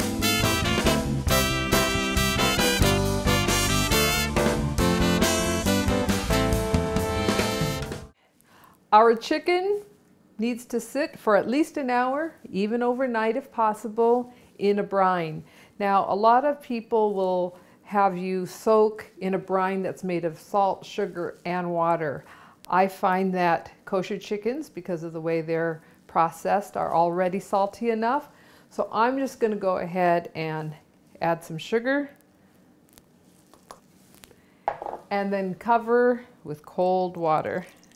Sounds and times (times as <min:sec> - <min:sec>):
Music: 0:00.0 - 0:08.2
Speech: 0:08.9 - 0:32.2, 0:35.1 - 0:37.7.